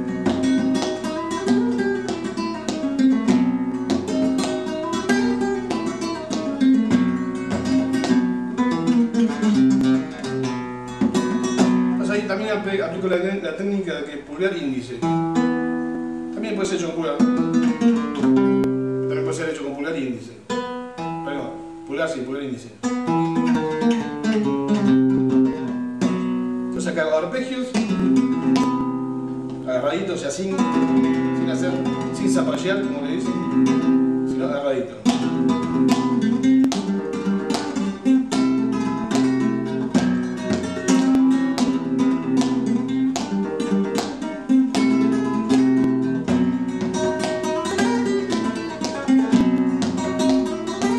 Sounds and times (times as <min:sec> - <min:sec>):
Acoustic guitar: 0:00.0 - 0:50.9
Speech: 0:12.0 - 0:15.1, 0:16.4 - 0:17.4, 0:19.1 - 0:20.5, 0:21.2 - 0:22.8, 0:26.8 - 0:27.9, 0:29.6 - 0:33.4, 0:34.3 - 0:35.1.